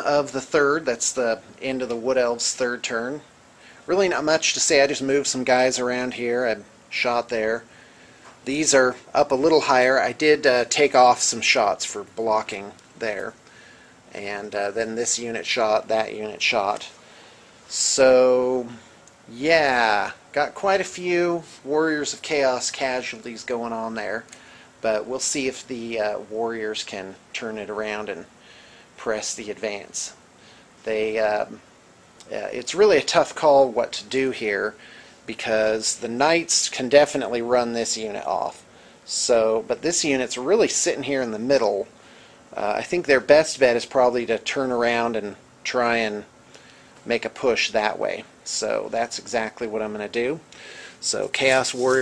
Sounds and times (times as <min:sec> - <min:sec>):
Speech: 0:00.0 - 0:07.7, 0:08.4 - 0:13.4, 0:14.1 - 0:17.0, 0:17.7 - 0:28.3, 0:29.0 - 0:30.2, 0:30.8 - 0:31.6, 0:32.2 - 0:41.9, 0:42.5 - 0:46.3, 0:47.0 - 0:52.0.